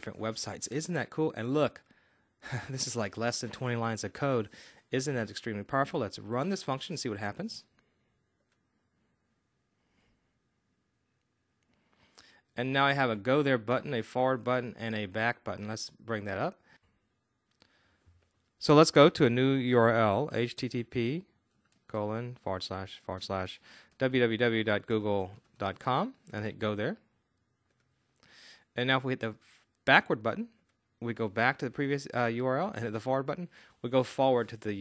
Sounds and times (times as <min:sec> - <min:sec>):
Speech: 0:00.0 - 0:01.8, 0:02.5 - 0:07.7, 0:12.6 - 0:16.6, 0:18.6 - 0:27.1, 0:28.8 - 0:34.8.